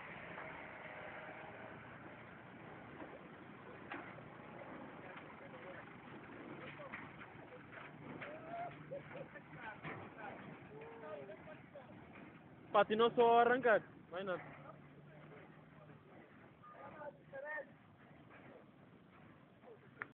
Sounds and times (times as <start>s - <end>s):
Speech: 4.5s - 5.9s, 12.7s - 17.8s.